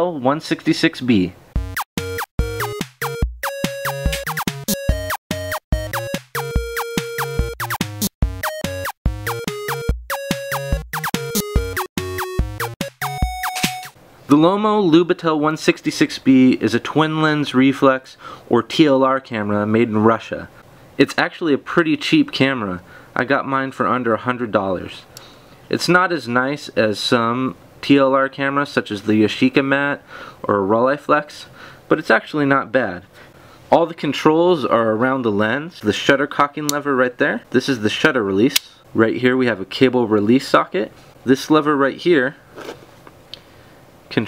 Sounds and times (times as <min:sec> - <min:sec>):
Speech: 0:00.0 - 0:01.4, 0:14.3 - 0:25.1, 0:25.7 - 0:33.1, 0:33.7 - 0:42.4.